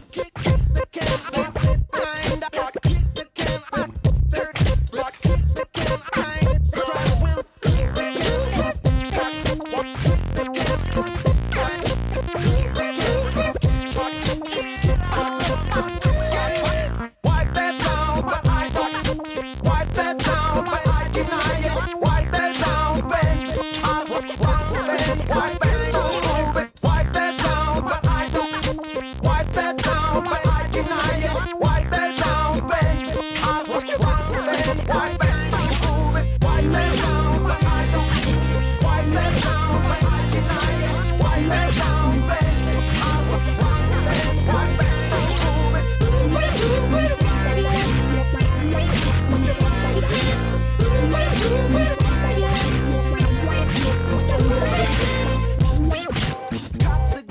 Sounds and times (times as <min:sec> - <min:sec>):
Music: 0:00.0 - 0:57.3.